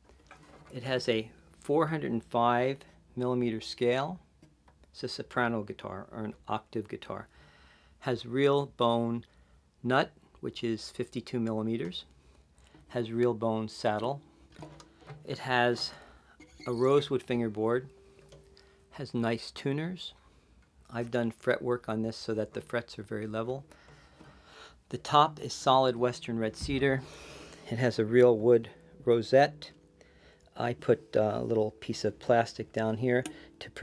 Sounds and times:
Speech: 0:00.7 - 0:04.2, 0:04.9 - 0:07.3, 0:08.0 - 0:12.1, 0:12.9 - 0:14.2, 0:15.3 - 0:16.0, 0:16.6 - 0:17.9, 0:19.0 - 0:20.2, 0:20.9 - 0:23.7, 0:24.9 - 0:27.0, 0:27.7 - 0:29.8, 0:30.5 - 0:33.8.

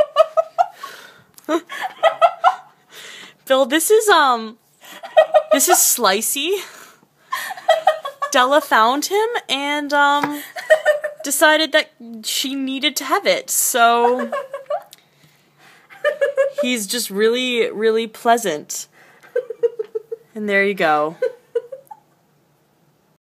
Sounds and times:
Speech: 0:20.4 - 0:21.2.

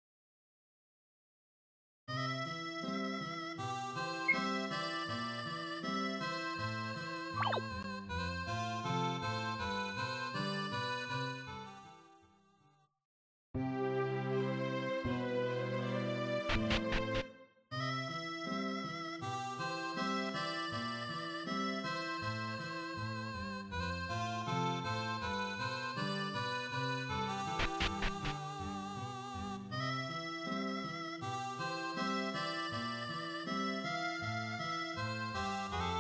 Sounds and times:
Music: 0:02.1 - 0:13.0, 0:13.6 - 0:36.0.

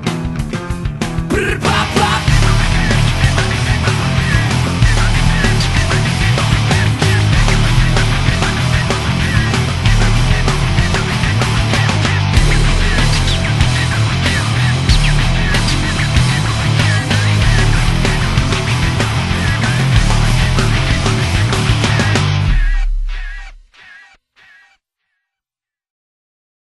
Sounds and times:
Music: 0:00.0 - 0:24.0.

